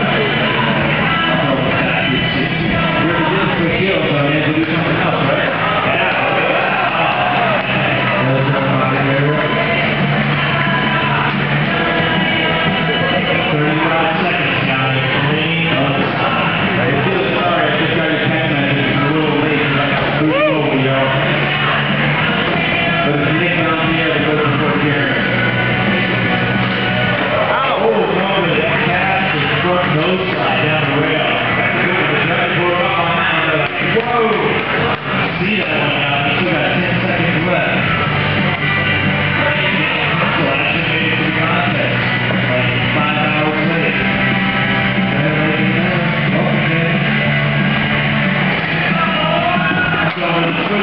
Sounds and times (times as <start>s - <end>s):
Speech: 0.0s - 6.3s, 8.0s - 9.8s, 13.0s - 21.6s, 23.0s - 25.4s, 27.3s - 34.6s, 35.4s - 38.0s, 39.4s - 44.0s, 45.1s - 47.1s, 48.9s - 50.8s
Music: 0.0s - 50.8s.